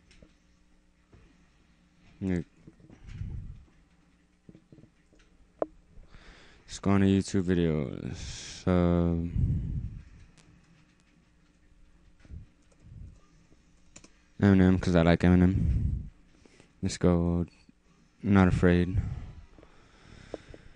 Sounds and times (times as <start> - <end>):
Inside, small room: 0.0 - 20.7
Speech: 2.2 - 2.5, 6.7 - 9.4, 14.4 - 15.8, 16.8 - 17.6, 18.2 - 19.2.